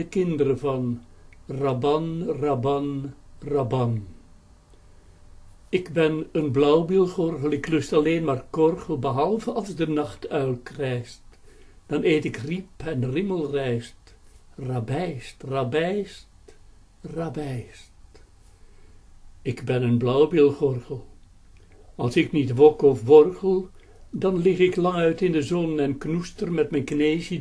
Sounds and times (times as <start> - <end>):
Speech: 0.0 - 4.2, 5.8 - 11.2, 11.9 - 16.3, 17.0 - 17.9, 19.4 - 21.2, 22.0 - 27.4.